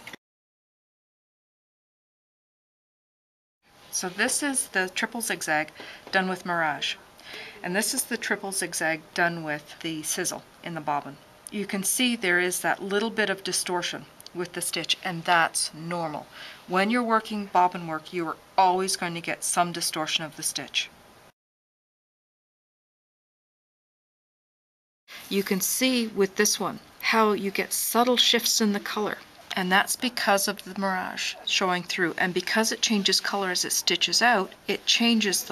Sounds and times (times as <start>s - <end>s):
Speech: 3.9s - 21.0s, 25.3s - 35.5s.